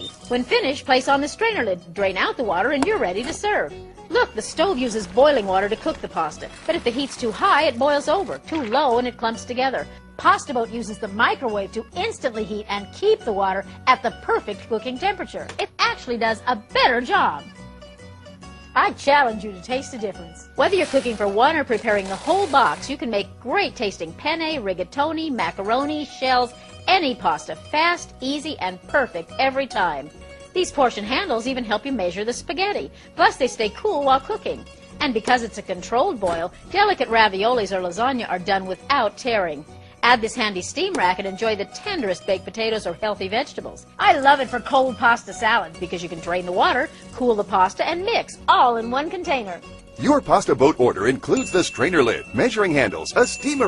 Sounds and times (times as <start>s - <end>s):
Music: 0.0s - 53.6s
Speech: 0.3s - 17.4s, 18.8s - 30.0s, 30.6s - 53.6s.